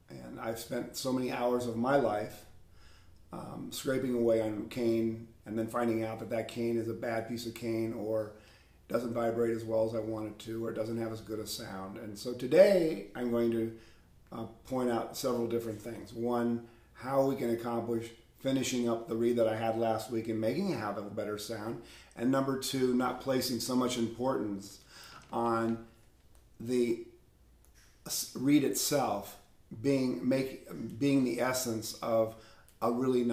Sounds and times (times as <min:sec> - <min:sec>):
Speech: 0:00.0 - 0:02.5, 0:03.3 - 0:25.9, 0:26.6 - 0:27.1, 0:28.1 - 0:33.3.